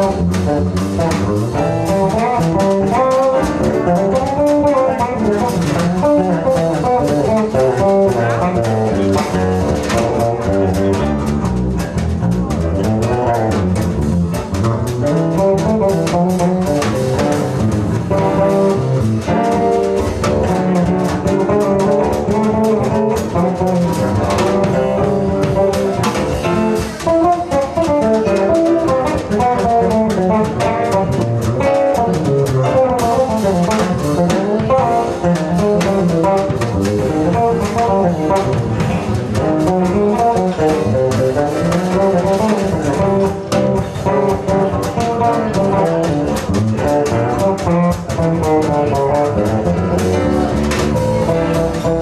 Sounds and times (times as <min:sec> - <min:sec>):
Bass guitar: 0:00.0 - 0:52.0
Bowed string instrument: 0:00.0 - 0:52.0
Drum kit: 0:00.0 - 0:52.0.